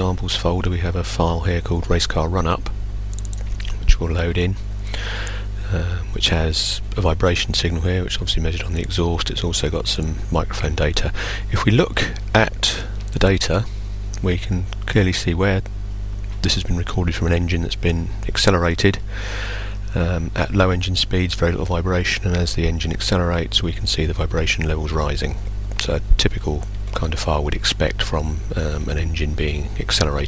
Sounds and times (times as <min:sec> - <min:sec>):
Speech: 0:00.0 - 0:02.8, 0:03.6 - 0:15.7, 0:16.4 - 0:30.2.